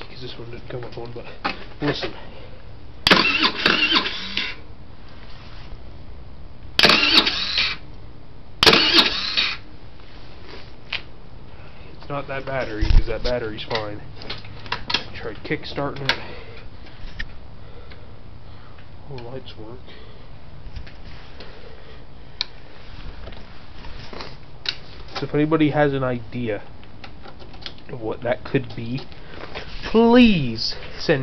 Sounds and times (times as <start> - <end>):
Speech: 0.0 - 2.2, 12.0 - 14.1, 15.2 - 16.3, 19.1 - 20.0, 25.2 - 26.7, 27.9 - 29.1, 29.9 - 31.2.